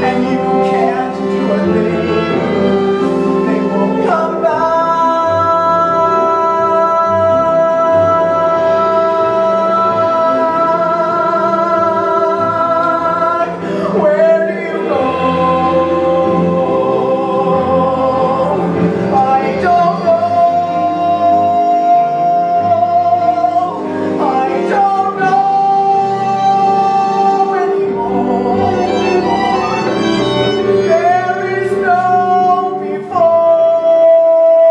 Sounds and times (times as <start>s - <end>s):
Music: 0.0s - 34.7s
Yodeling: 0.0s - 34.7s.